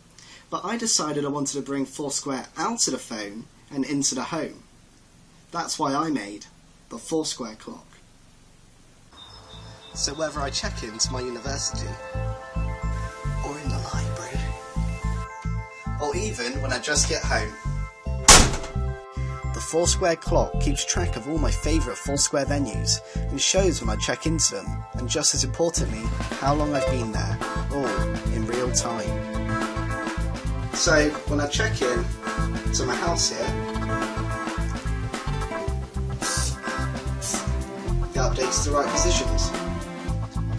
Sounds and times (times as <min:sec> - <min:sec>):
Speech: 0:00.5 - 0:04.7, 0:05.5 - 0:08.0, 0:10.0 - 0:12.0, 0:13.4 - 0:14.5, 0:16.0 - 0:17.6, 0:19.5 - 0:29.2, 0:30.8 - 0:32.1, 0:32.7 - 0:33.6, 0:36.3 - 0:36.6, 0:38.2 - 0:39.6
Music: 0:09.2 - 0:40.5.